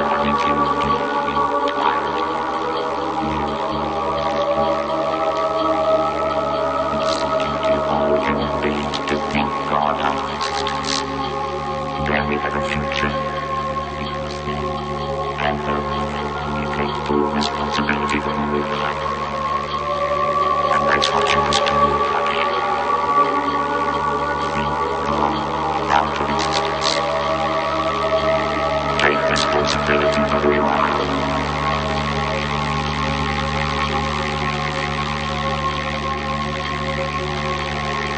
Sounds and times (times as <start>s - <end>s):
Electronic music: 0.0s - 38.1s.